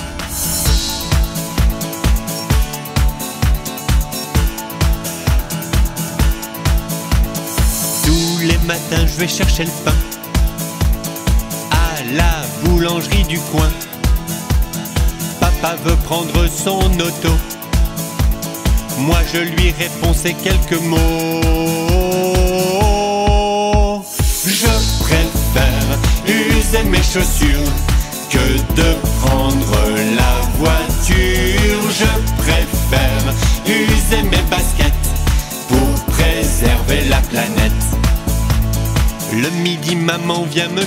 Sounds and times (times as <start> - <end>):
Music: 0.0 - 40.8.